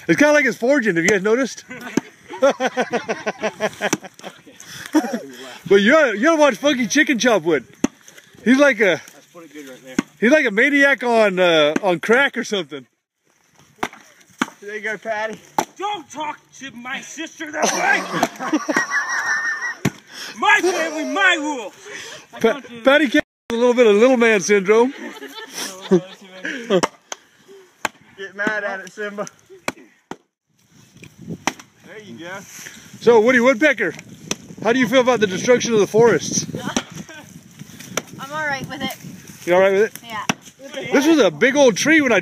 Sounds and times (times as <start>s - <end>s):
Outside, rural or natural: 0.0s - 42.2s.